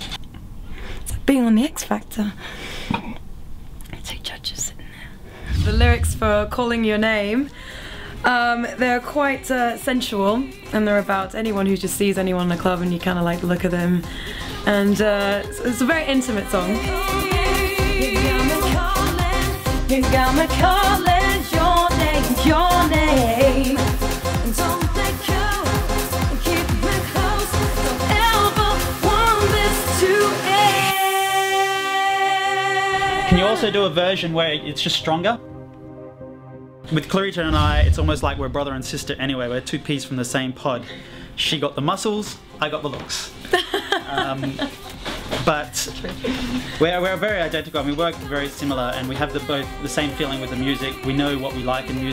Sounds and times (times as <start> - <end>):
Music: 5.4 - 52.1
Singing: 8.4 - 11.8, 14.5 - 33.8, 47.7 - 52.1.